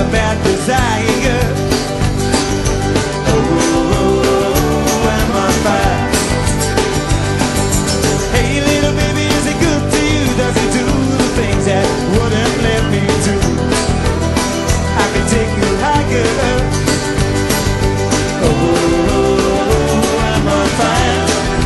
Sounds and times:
Country: 0.0 - 21.6.

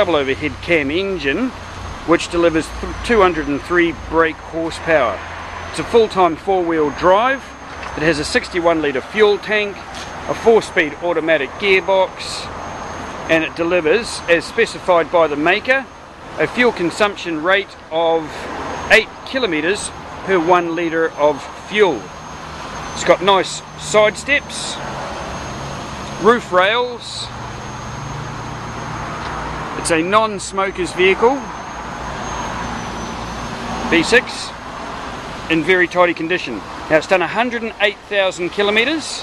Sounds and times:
Car: 0.0 - 39.2.

